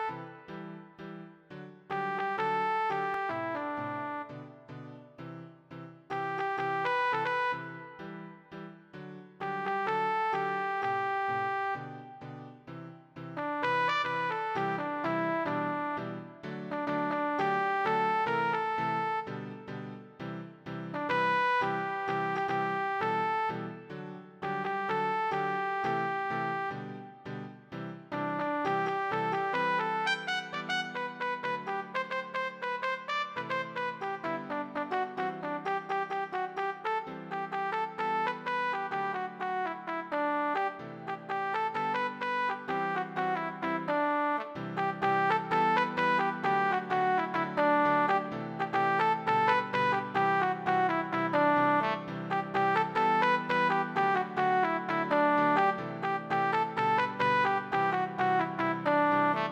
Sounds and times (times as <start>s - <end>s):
Trumpet: 0.0s - 0.8s, 1.9s - 4.6s, 6.1s - 8.4s, 9.4s - 12.0s, 13.4s - 19.8s, 20.9s - 27.2s, 28.1s - 59.5s.